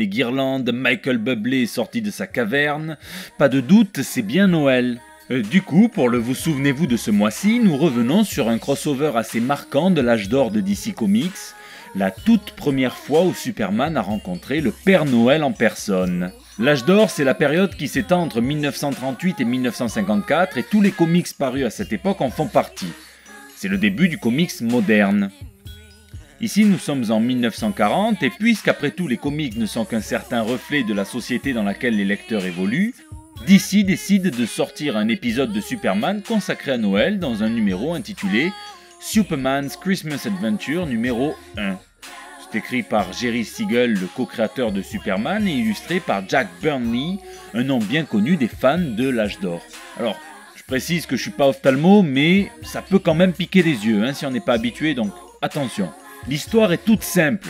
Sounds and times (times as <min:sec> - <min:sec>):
Speech: 0:00.0 - 0:23.0, 0:23.6 - 0:25.4, 0:26.4 - 0:41.8, 0:42.5 - 0:57.5
Music: 0:00.0 - 0:57.5.